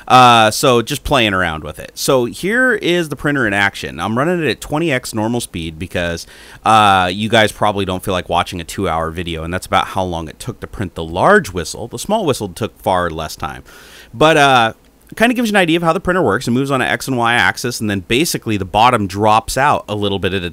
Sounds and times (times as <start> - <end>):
Speech: 0.0 - 20.5.